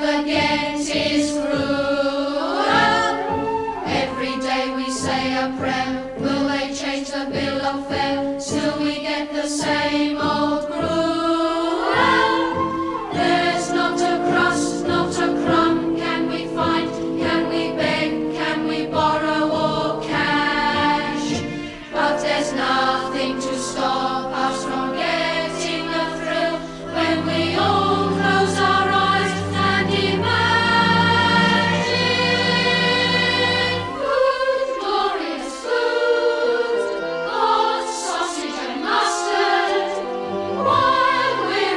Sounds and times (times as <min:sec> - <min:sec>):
A capella: 0:00.0 - 0:41.7.